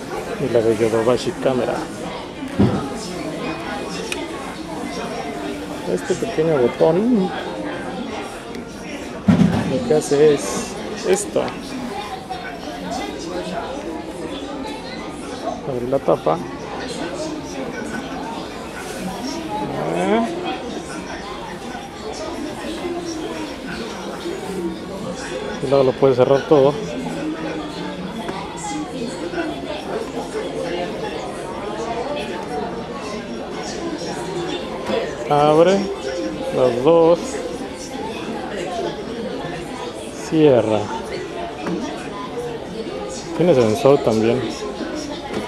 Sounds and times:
Speech: 0.0 - 45.4.

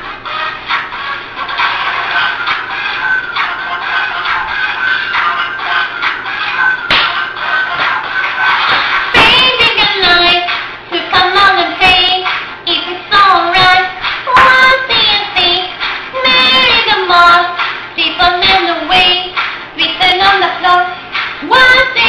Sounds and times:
Music: 0.0 - 22.0.

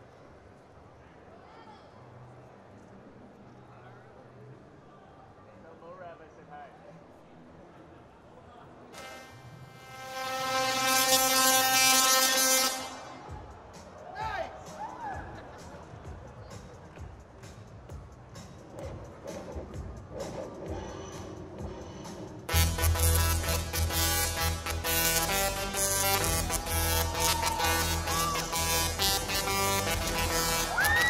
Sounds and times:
Music: 8.9 - 31.0.

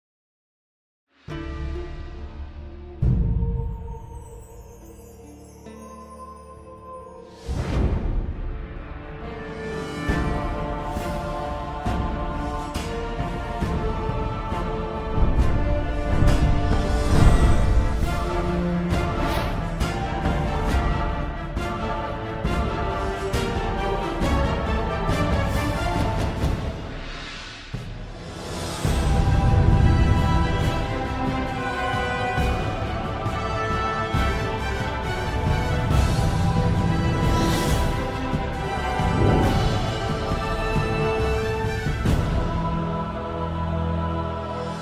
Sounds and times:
Music: 1.1 - 44.8.

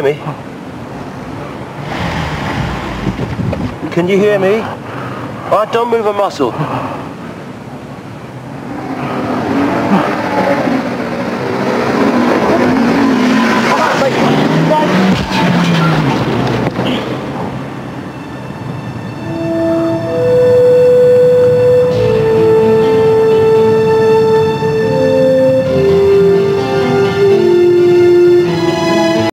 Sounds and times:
Music: 18.0 - 29.3.

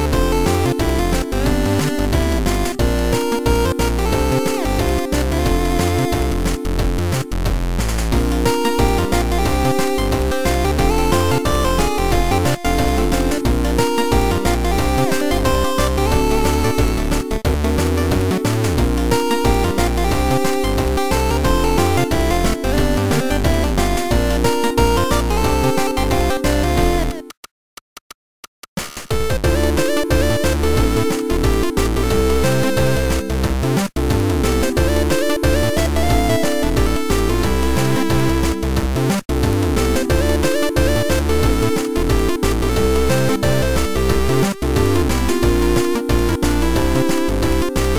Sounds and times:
Music: 0.0 - 27.4, 28.8 - 47.9.

